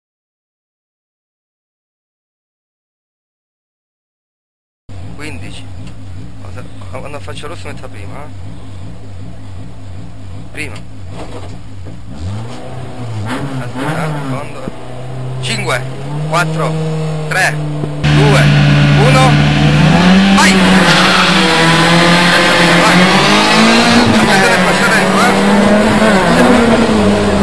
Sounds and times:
Car: 4.9s - 27.4s
Speech: 5.2s - 5.7s, 6.4s - 8.3s, 10.5s - 10.9s, 13.6s - 14.8s, 15.4s - 16.7s, 18.2s - 19.4s, 20.4s - 20.6s, 24.3s - 25.4s.

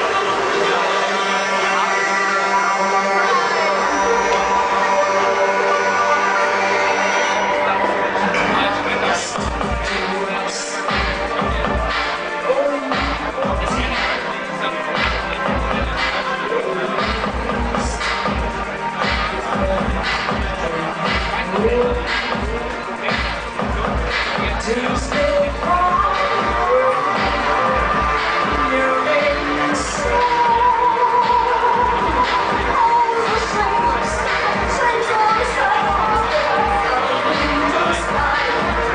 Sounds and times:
Music: 0.0s - 38.9s.

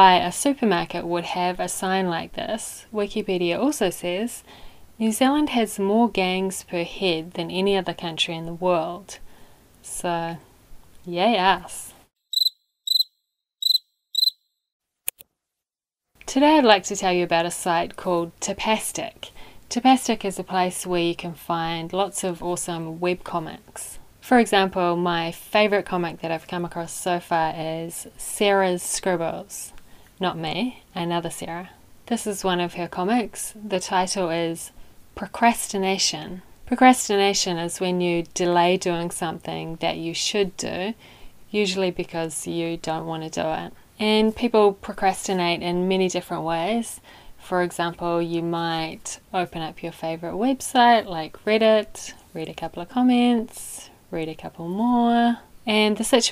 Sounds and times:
Speech: 0.0s - 4.4s, 5.0s - 9.2s, 9.8s - 10.4s, 11.0s - 12.0s, 16.2s - 56.3s
Inside, small room: 0.0s - 14.4s, 15.1s - 56.3s.

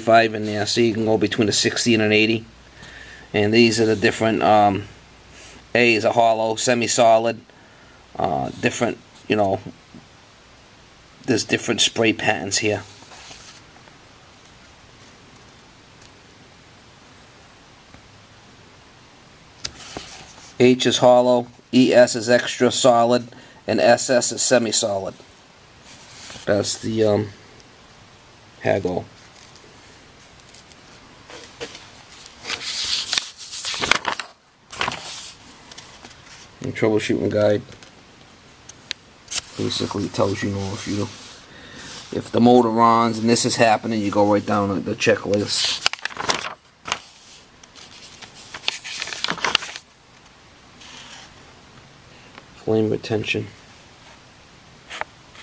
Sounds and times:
Speech: 0.0s - 2.5s, 3.3s - 5.0s, 5.7s - 7.5s, 8.2s - 9.8s, 11.3s - 12.9s, 20.6s - 25.2s, 26.5s - 27.4s, 28.6s - 29.1s, 36.6s - 37.8s, 39.6s - 41.2s, 42.1s - 45.8s, 52.6s - 53.6s.

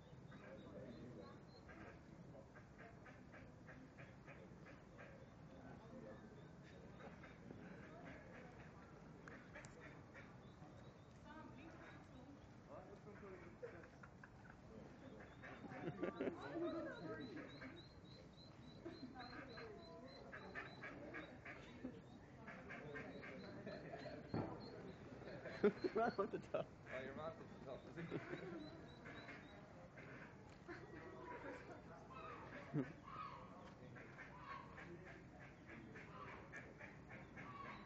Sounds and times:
Duck: 0.3s - 5.3s, 6.6s - 10.4s, 13.0s - 21.8s, 22.4s - 26.2s, 26.9s - 37.8s.

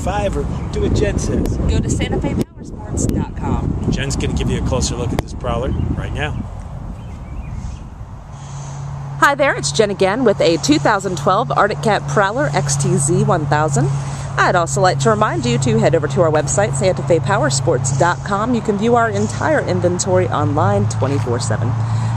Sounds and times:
Speech: 0.0s - 6.4s, 9.2s - 21.8s.

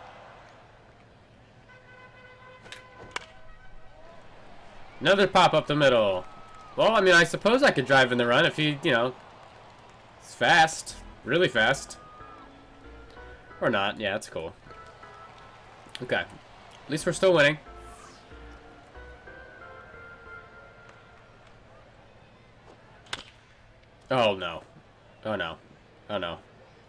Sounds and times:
Speech: 6.8s - 9.2s, 10.3s - 12.0s, 16.9s - 17.6s, 24.1s - 26.5s
Music: 11.0s - 14.0s, 14.6s - 15.6s, 17.5s - 21.4s.

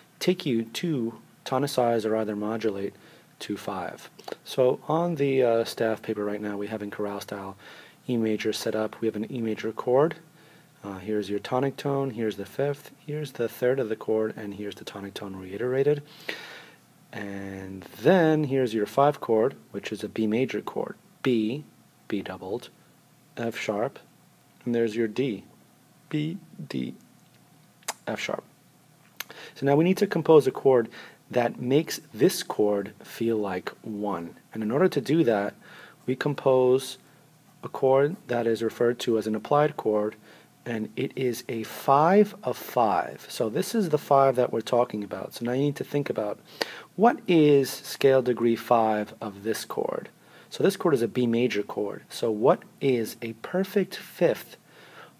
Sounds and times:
Speech: 0.2s - 16.1s, 17.1s - 22.8s, 23.4s - 25.5s, 26.1s - 27.1s, 27.9s - 28.5s, 29.6s - 37.0s, 37.6s - 46.4s, 47.0s - 54.6s.

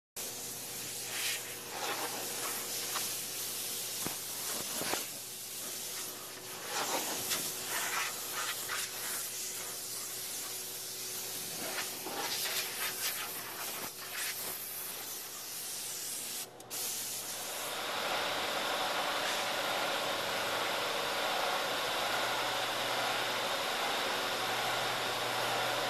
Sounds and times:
Spray: 0.2s - 17.8s.

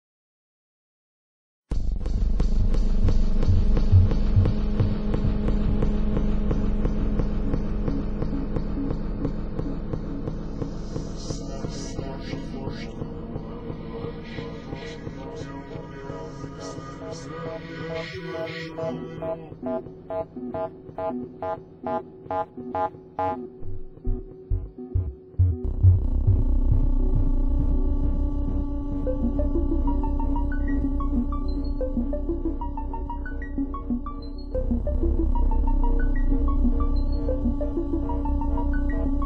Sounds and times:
Scary music: 1.7s - 39.2s.

